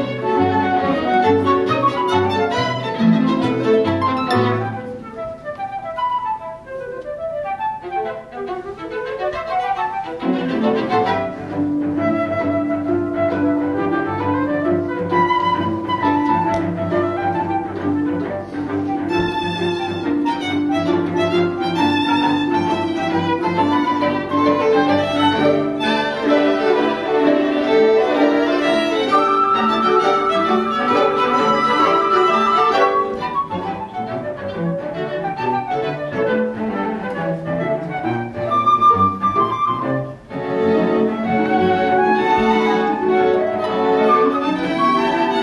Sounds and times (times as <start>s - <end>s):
Violin, fiddle: 0.0s - 5.1s, 7.7s - 45.4s
Cello: 0.0s - 45.4s
Flute: 0.0s - 45.4s.